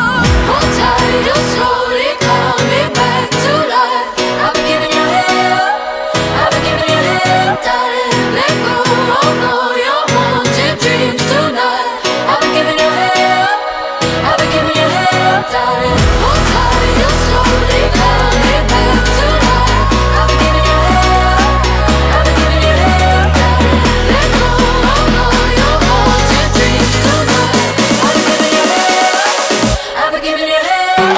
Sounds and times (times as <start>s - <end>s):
Jingle (music): 12.1s - 29.8s.